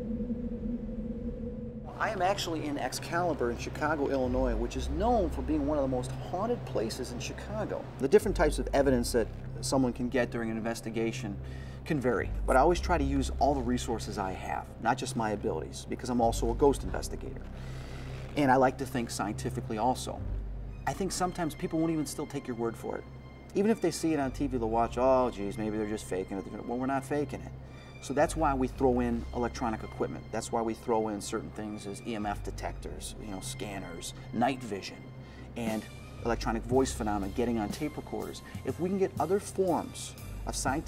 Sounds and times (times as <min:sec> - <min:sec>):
Music: 0:01.5 - 0:40.8
Speech: 0:02.0 - 0:17.4, 0:18.4 - 0:20.2, 0:20.9 - 0:23.0, 0:23.6 - 0:35.0, 0:35.6 - 0:40.8.